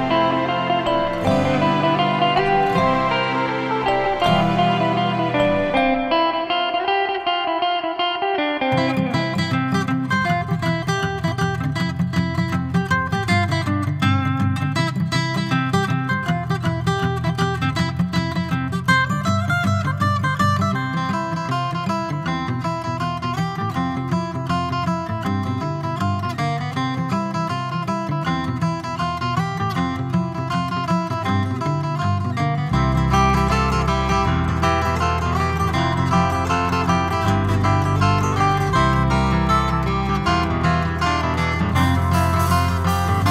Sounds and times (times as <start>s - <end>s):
Guitar: 0.0s - 43.3s.